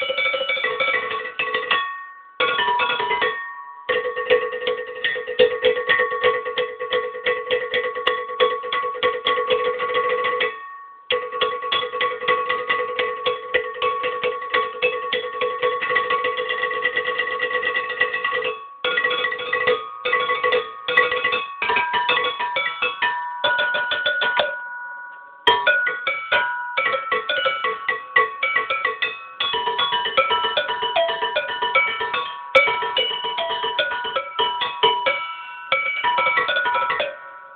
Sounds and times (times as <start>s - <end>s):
Percussion: 0.0s - 37.5s.